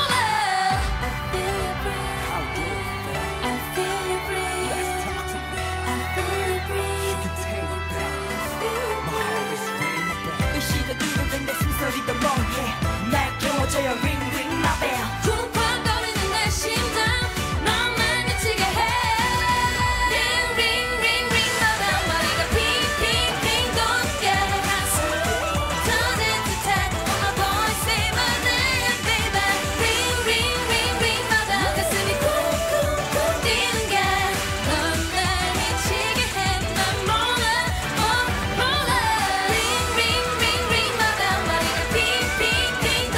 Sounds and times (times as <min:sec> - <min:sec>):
Singing: 0:00.0 - 0:43.1.